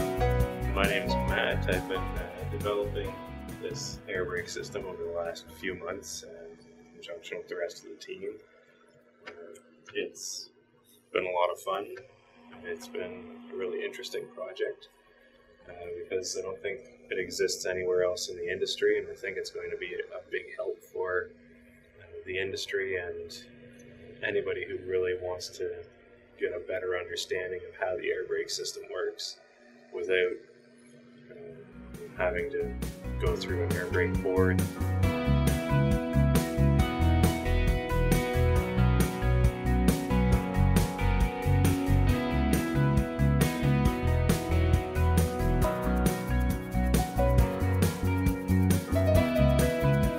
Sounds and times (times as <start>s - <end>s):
Speech: 0.8s - 8.4s, 9.3s - 10.5s, 11.2s - 12.0s, 12.6s - 14.9s, 15.7s - 21.3s, 22.0s - 23.5s, 24.2s - 29.4s, 30.0s - 30.4s, 31.3s - 34.7s.